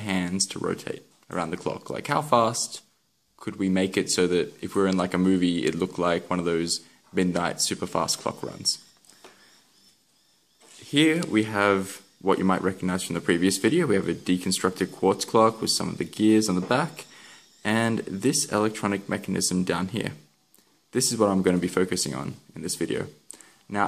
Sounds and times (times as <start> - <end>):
Speech: 0.0 - 8.9, 10.8 - 20.3, 20.9 - 23.8.